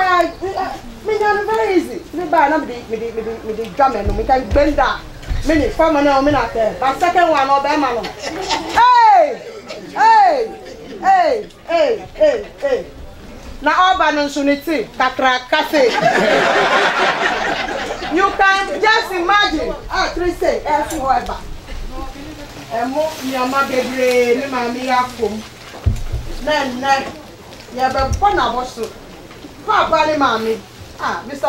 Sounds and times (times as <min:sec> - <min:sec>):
Speech: 0:00.0 - 0:16.1, 0:17.8 - 0:25.5, 0:26.4 - 0:29.0
Laughter: 0:08.0 - 0:11.1, 0:15.8 - 0:18.4.